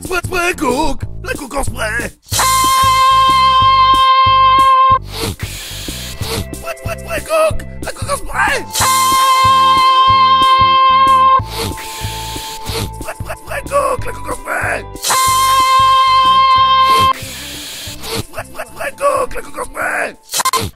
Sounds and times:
Speech: 0.0 - 2.2, 6.6 - 8.7, 13.5 - 14.8, 18.6 - 20.2
Music: 0.0 - 20.7.

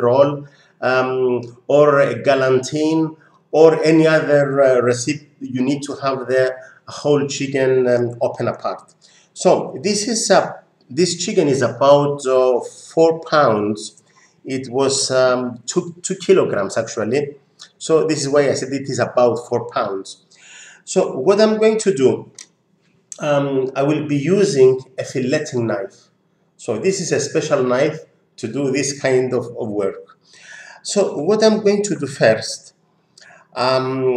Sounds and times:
Speech: 0.0 - 22.4, 23.2 - 26.0, 26.6 - 30.1, 30.8 - 34.1.

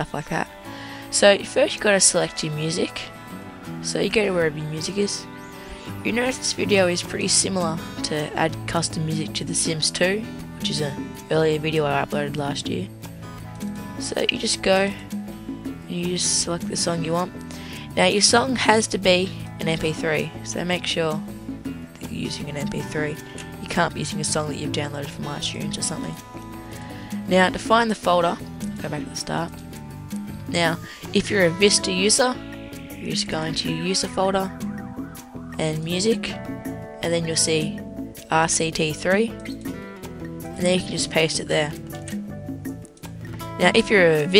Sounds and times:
Speech: 0.0 - 0.5, 1.1 - 3.1, 3.8 - 5.2, 6.0 - 12.9, 14.0 - 15.0, 15.9 - 21.2, 22.0 - 26.2, 27.3 - 29.5, 30.5 - 32.4, 33.0 - 34.5, 35.6 - 36.4, 37.0 - 39.4, 40.6 - 41.8, 43.6 - 44.3
Music: 0.0 - 44.3.

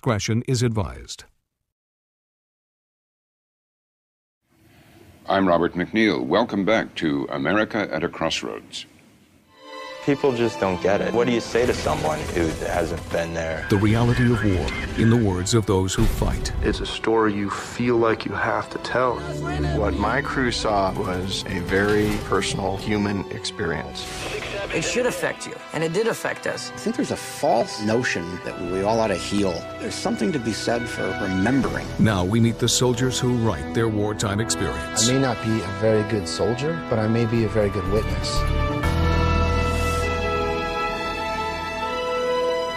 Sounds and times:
Speech: 0.0 - 1.3, 5.3 - 8.9, 10.0 - 38.4
Music: 9.5 - 42.7.

